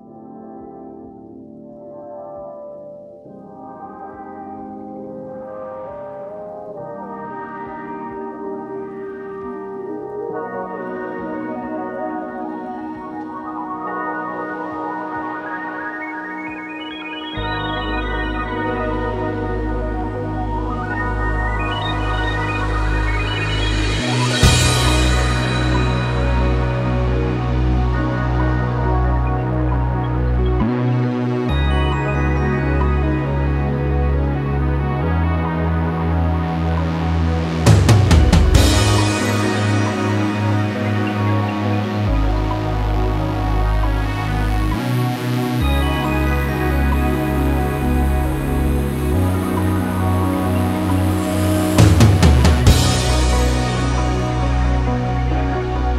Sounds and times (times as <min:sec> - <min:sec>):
Music: 0:00.0 - 0:55.9.